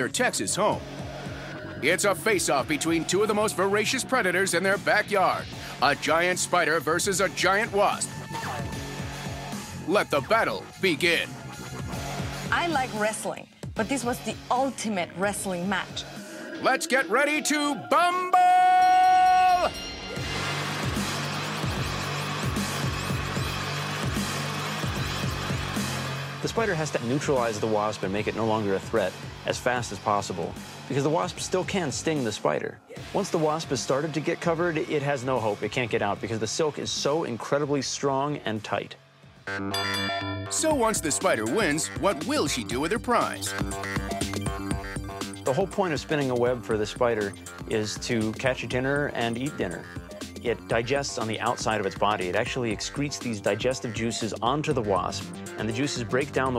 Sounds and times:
Speech: 0:00.0 - 0:00.8, 0:01.8 - 0:08.1, 0:09.9 - 0:11.3, 0:12.5 - 0:16.0, 0:16.6 - 0:18.5, 0:26.4 - 0:39.0, 0:40.6 - 0:43.5, 0:45.5 - 0:56.5
Music: 0:00.0 - 0:56.5.

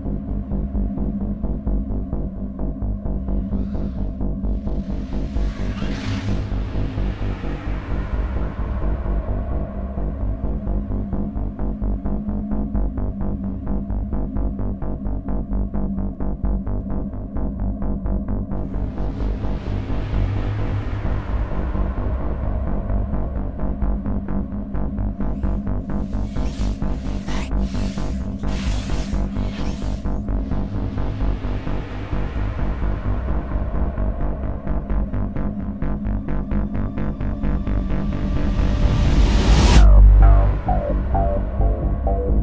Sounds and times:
Music: 0:00.0 - 0:42.4.

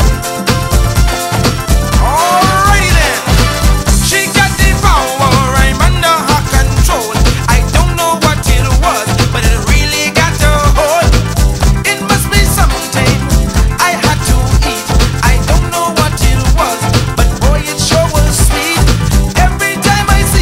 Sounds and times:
Music: 0:00.0 - 0:20.4.

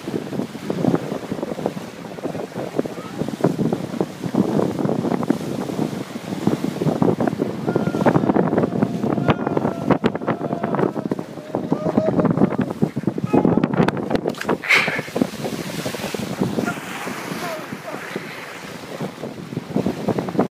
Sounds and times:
Sailboat, sailing ship: 0:00.0 - 0:20.5.

